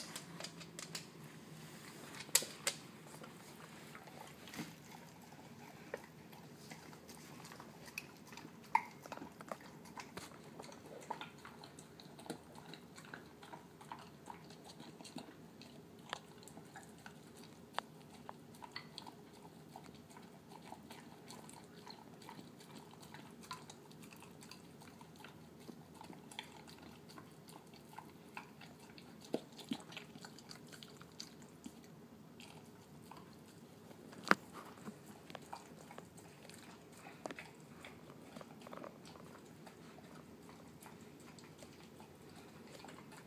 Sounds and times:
Dog: 0:03.1 - 0:43.2.

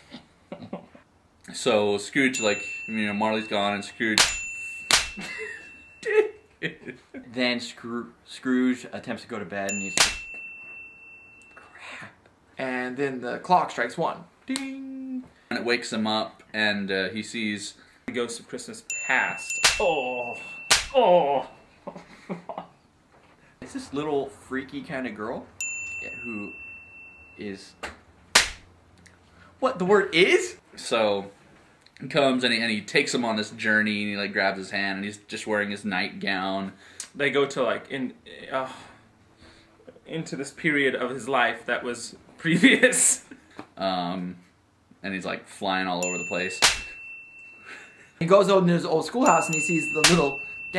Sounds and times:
Slap, smack: 0:04.2 - 0:05.2, 0:10.0 - 0:10.3, 0:19.6 - 0:19.9, 0:20.7 - 0:21.0, 0:28.4 - 0:28.7, 0:46.6 - 0:46.9, 0:50.0 - 0:50.2.

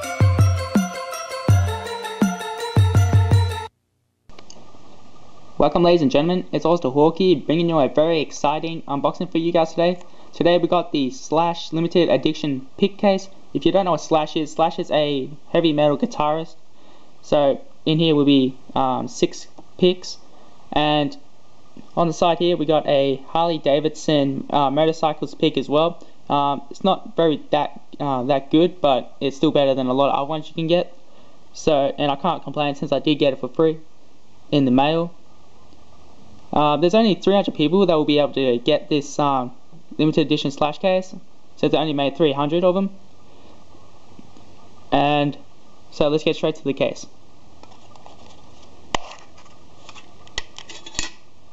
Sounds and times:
Speech: 0:05.6 - 0:16.6, 0:17.2 - 0:21.2, 0:21.9 - 0:31.0, 0:31.6 - 0:33.9, 0:34.5 - 0:35.2, 0:36.5 - 0:43.0, 0:44.9 - 0:47.2.

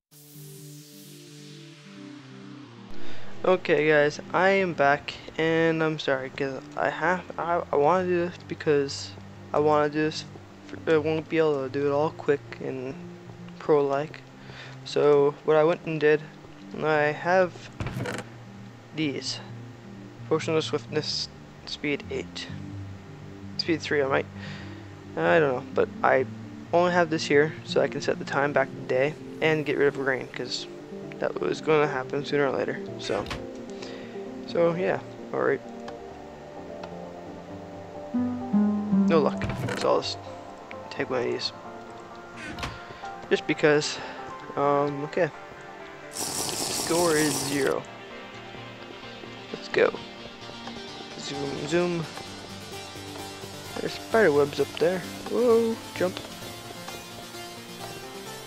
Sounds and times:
Music: 0:00.1 - 0:58.4
Speech: 0:03.4 - 0:13.0, 0:13.6 - 0:14.2, 0:14.9 - 0:17.6, 0:19.0 - 0:19.5, 0:20.3 - 0:22.6, 0:23.6 - 0:24.3, 0:25.2 - 0:33.4, 0:34.5 - 0:35.6, 0:39.1 - 0:40.3, 0:40.9 - 0:41.6, 0:43.3 - 0:44.0, 0:44.6 - 0:45.4, 0:46.9 - 0:47.8, 0:49.5 - 0:50.0, 0:51.2 - 0:52.1, 0:53.8 - 0:56.2.

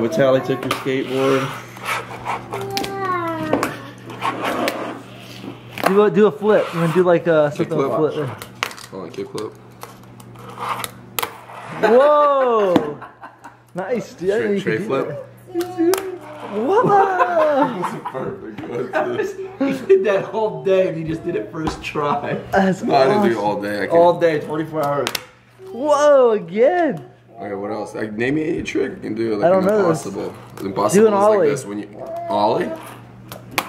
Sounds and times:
Laughter: 0:11.8 - 0:13.7, 0:16.6 - 0:20.3.

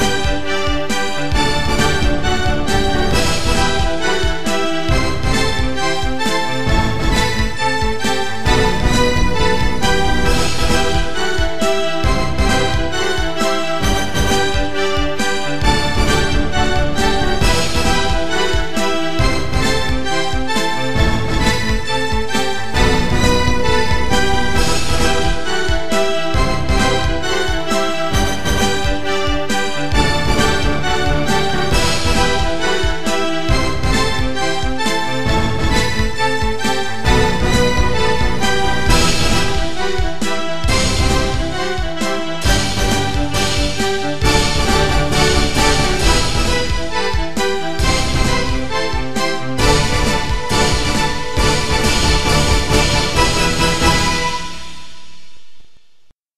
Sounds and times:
Piano: 0:00.0 - 0:56.0.

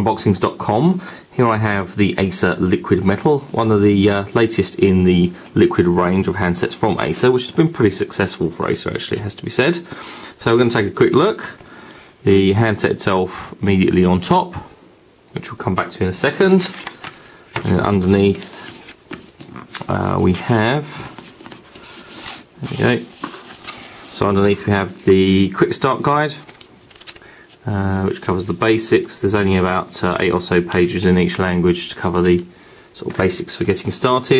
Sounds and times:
Speech: 0:00.0 - 0:11.6, 0:12.2 - 0:16.9, 0:17.6 - 0:18.7, 0:19.8 - 0:21.2, 0:22.6 - 0:23.2, 0:24.1 - 0:26.5, 0:27.6 - 0:34.3.

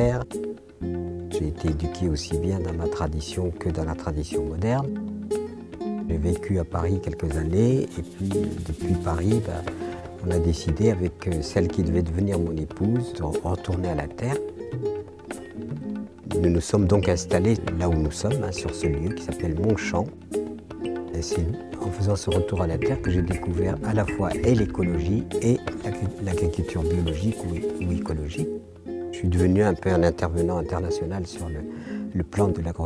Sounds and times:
Speech: 0:00.0 - 0:00.3, 0:01.4 - 0:04.9, 0:06.1 - 0:14.5, 0:16.3 - 0:20.2, 0:21.1 - 0:32.8
Music: 0:00.0 - 0:32.8.

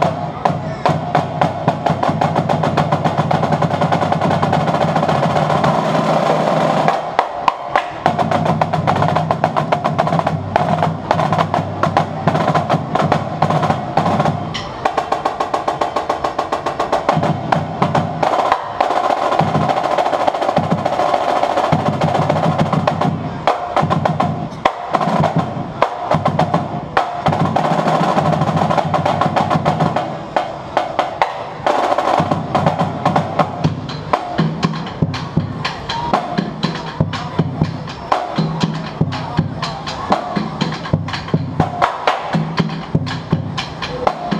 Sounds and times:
Drum roll: 0:00.0 - 0:44.3.

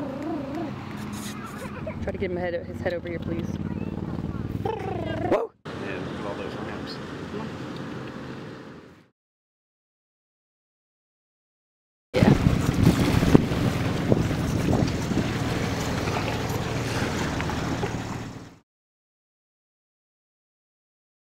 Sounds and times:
Outside, rural or natural: 0:00.0 - 0:09.2, 0:12.2 - 0:18.6.

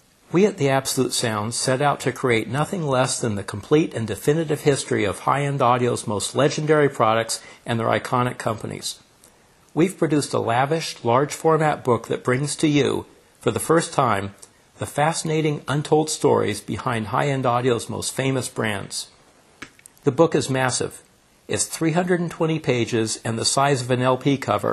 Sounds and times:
Speech: 0:00.3 - 0:09.1, 0:09.8 - 0:19.2, 0:20.0 - 0:24.7.

